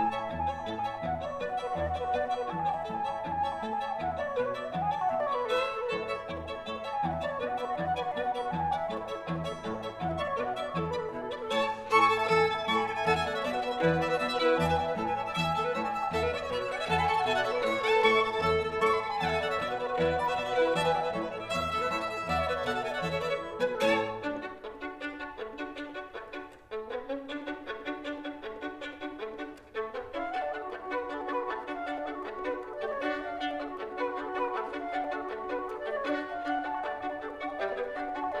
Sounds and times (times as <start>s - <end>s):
Cello: 0.0s - 38.4s
Flute: 0.0s - 38.4s
Violin, fiddle: 0.0s - 38.4s.